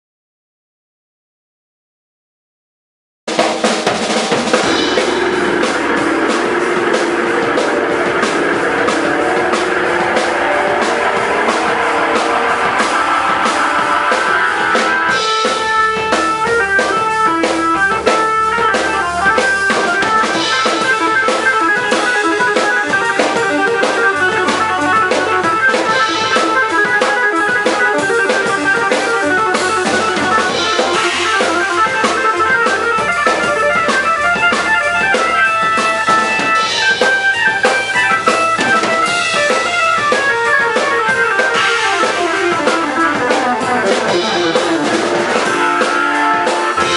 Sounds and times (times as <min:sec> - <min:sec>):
Music: 0:03.3 - 0:46.9.